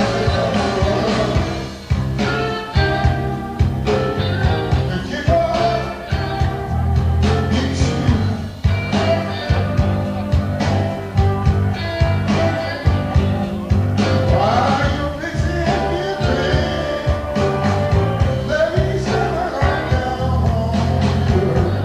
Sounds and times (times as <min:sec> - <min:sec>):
Musical instrument: 0:00.0 - 0:21.8.